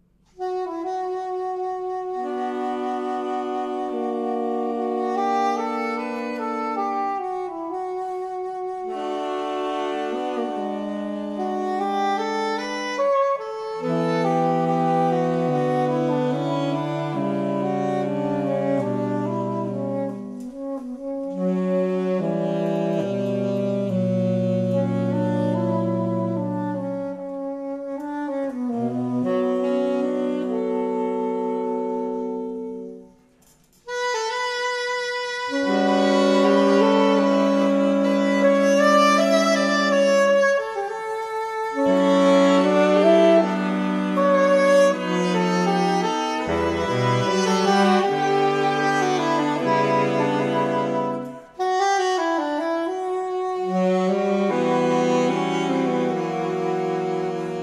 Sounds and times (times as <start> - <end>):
Clarinet: 0.0 - 57.6
Saxophone: 0.0 - 57.6.